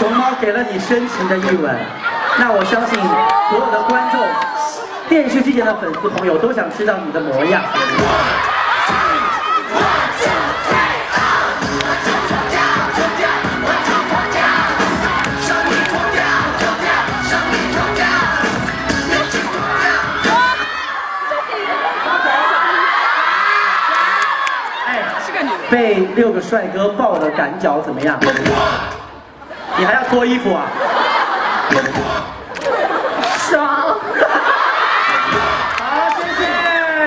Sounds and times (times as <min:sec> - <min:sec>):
Music: 0:09.7 - 0:20.7, 0:28.2 - 0:29.0.